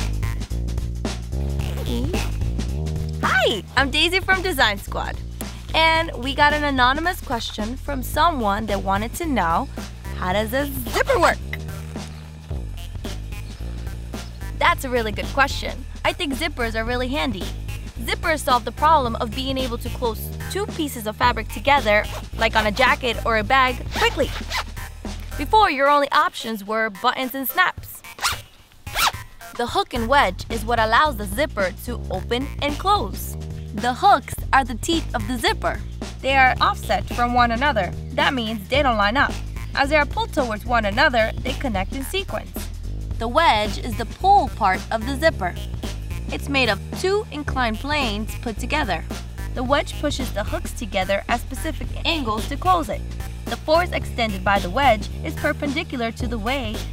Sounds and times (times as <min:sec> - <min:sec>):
Music: 0:00.0 - 0:56.9
Speech: 0:03.2 - 0:11.6, 0:14.6 - 0:24.4, 0:25.3 - 0:28.0, 0:29.6 - 0:45.6, 0:46.3 - 0:56.9.